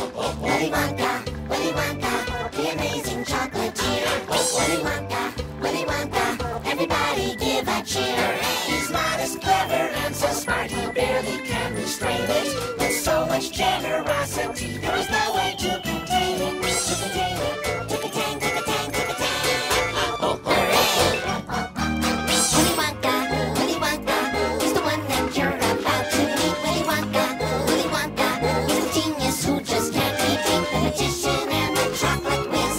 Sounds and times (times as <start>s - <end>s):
Music: 0.0s - 32.7s.